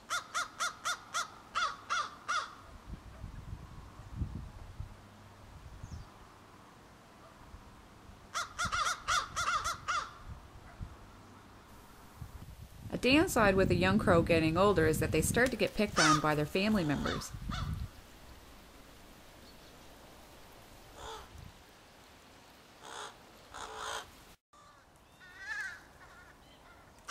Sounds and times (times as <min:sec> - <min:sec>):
Outside, rural or natural: 0:00.0 - 0:27.1
Caw: 0:00.1 - 0:02.6, 0:08.3 - 0:10.2, 0:21.0 - 0:21.3, 0:22.8 - 0:27.1
Speech: 0:12.9 - 0:17.3.